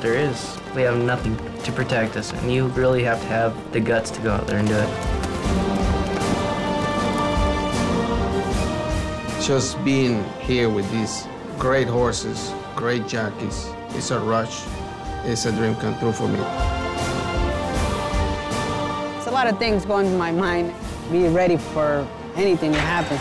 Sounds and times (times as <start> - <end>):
Music: 0.0 - 23.2.